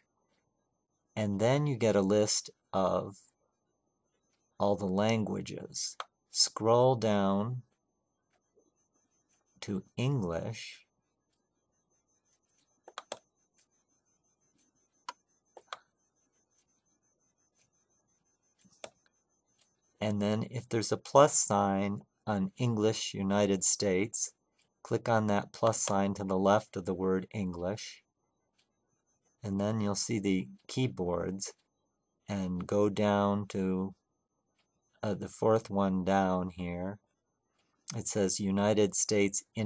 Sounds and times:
Speech: 0:01.2 - 0:03.3, 0:04.6 - 0:07.7, 0:09.6 - 0:10.9, 0:20.0 - 0:28.1, 0:29.4 - 0:31.6, 0:32.3 - 0:34.0, 0:35.0 - 0:37.0, 0:37.9 - 0:39.6.

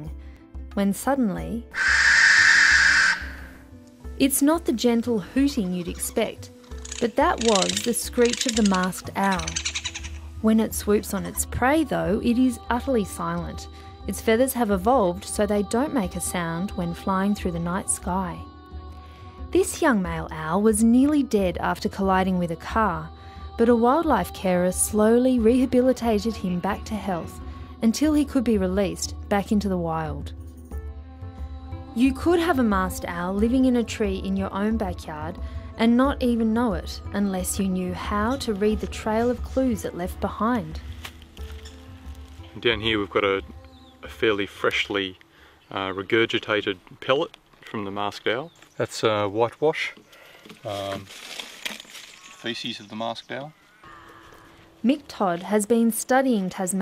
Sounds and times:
Music: 0:00.0 - 0:56.8
Speech: 0:04.2 - 0:06.4, 0:07.0 - 0:09.6, 0:10.4 - 0:18.4, 0:19.6 - 0:30.3, 0:50.7 - 0:51.1, 0:54.9 - 0:56.8.

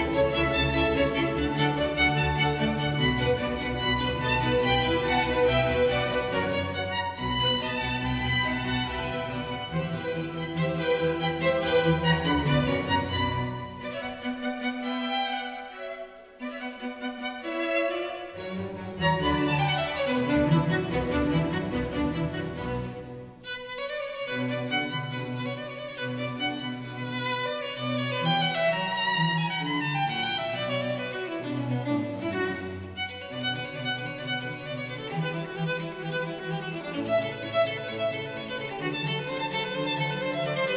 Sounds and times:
Violin, fiddle: 0:00.0 - 0:40.7.

